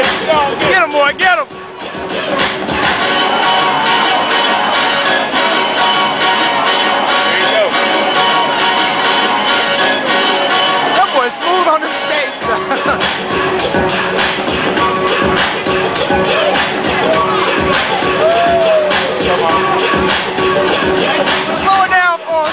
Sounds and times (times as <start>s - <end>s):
Music: 0.0s - 22.5s.